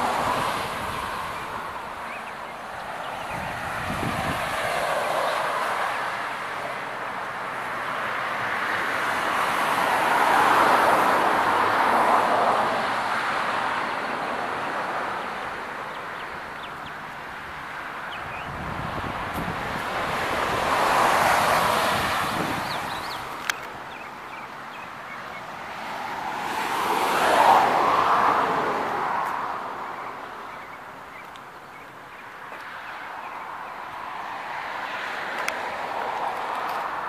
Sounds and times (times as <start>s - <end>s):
Vehicle: 0.0s - 37.0s.